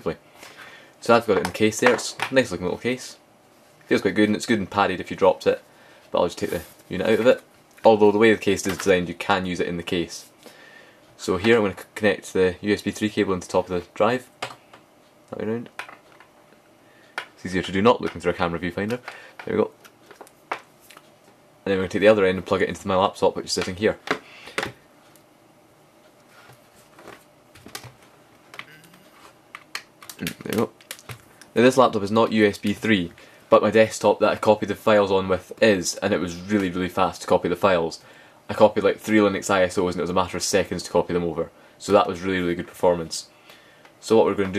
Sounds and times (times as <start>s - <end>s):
Speech: 0.0s - 0.2s, 1.0s - 3.2s, 3.9s - 10.3s, 11.2s - 14.3s, 15.3s - 15.8s, 17.4s - 19.8s, 21.6s - 24.0s, 30.2s - 30.8s, 31.6s - 43.3s, 44.0s - 44.5s
Inside, small room: 0.0s - 44.5s.